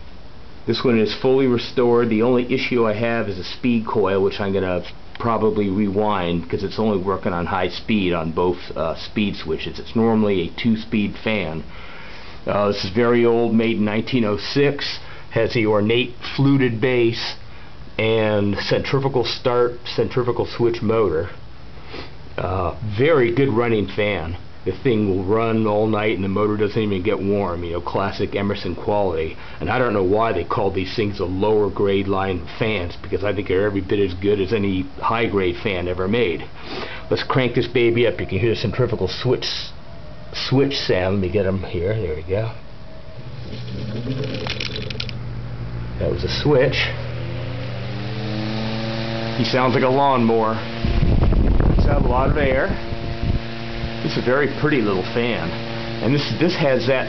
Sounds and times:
Speech: 0.6s - 11.7s, 12.4s - 17.4s, 18.0s - 21.4s, 22.4s - 42.6s, 46.0s - 47.0s, 49.4s - 50.7s, 51.7s - 52.8s, 54.0s - 57.0s
Mechanical fan: 42.6s - 57.0s.

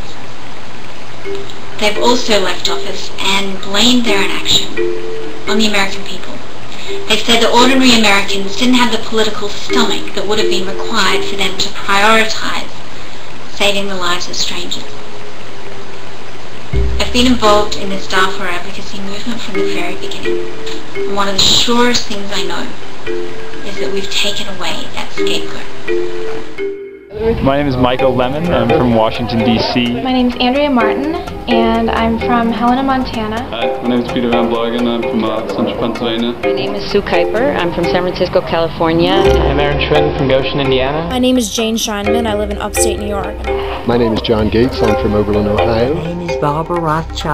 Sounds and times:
Music: 1.2s - 12.6s, 16.7s - 47.3s
Speech: 1.8s - 4.7s, 5.5s - 12.7s, 17.0s - 20.3s, 21.1s - 22.7s, 23.7s - 25.7s, 27.2s - 47.3s.

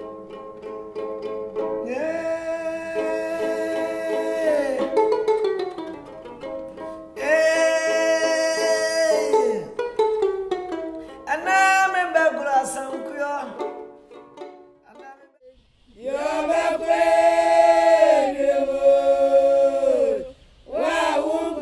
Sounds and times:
Traditional music: 2.9s - 11.5s, 13.6s - 15.4s.

